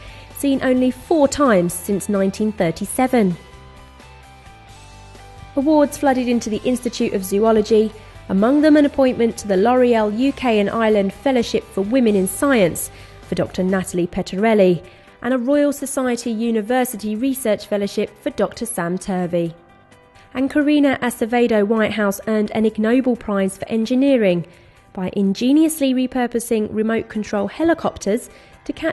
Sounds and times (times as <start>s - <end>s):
Music: 0.0s - 28.9s
Speech: 0.4s - 3.4s, 5.6s - 19.6s, 20.4s - 28.9s.